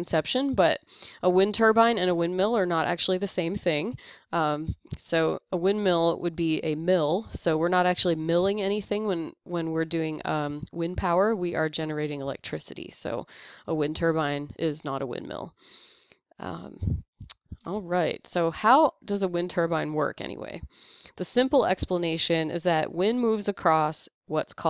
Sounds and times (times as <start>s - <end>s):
Speech: 0.0s - 15.5s, 16.4s - 17.0s, 17.6s - 24.6s.